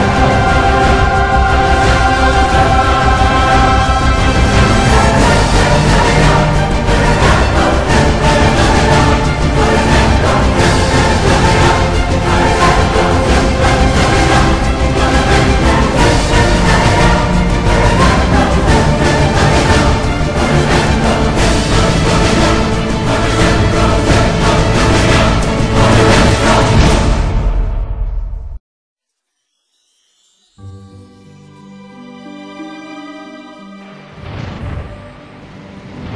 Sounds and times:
Music: 0.0 - 36.1.

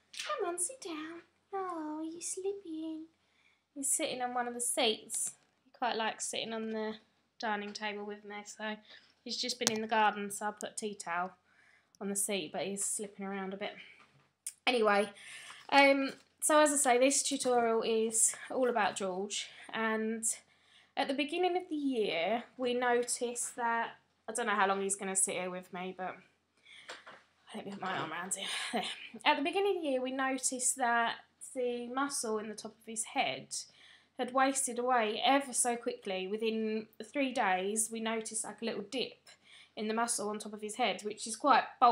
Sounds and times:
Speech: 0.2 - 3.1, 3.8 - 11.3, 12.0 - 13.9, 14.5 - 20.4, 21.0 - 26.2, 27.5 - 41.9.

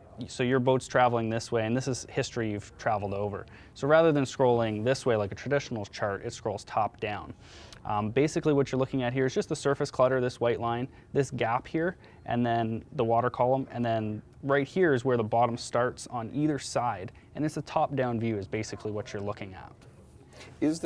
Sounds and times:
Speech: 0.0 - 7.3, 7.9 - 19.8, 20.6 - 20.8.

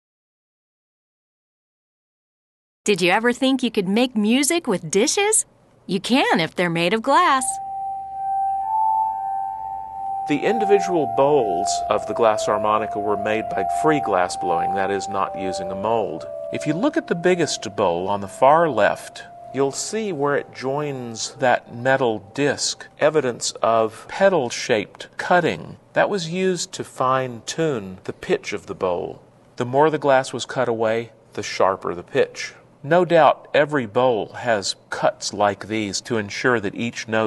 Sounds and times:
Harmonica: 7.4 - 23.0.

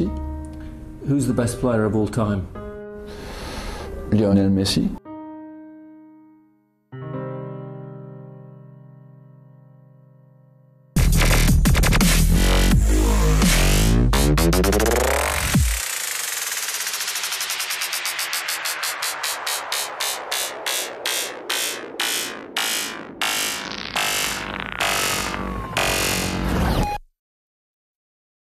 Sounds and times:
Music: 0.0 - 27.0.

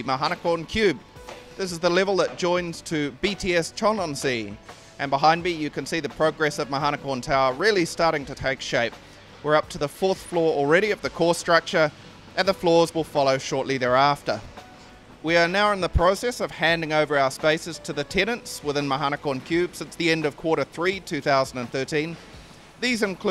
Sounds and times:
Speech: 0.0 - 1.0, 1.6 - 14.5, 15.2 - 22.2, 22.8 - 23.3
Music: 0.0 - 23.3.

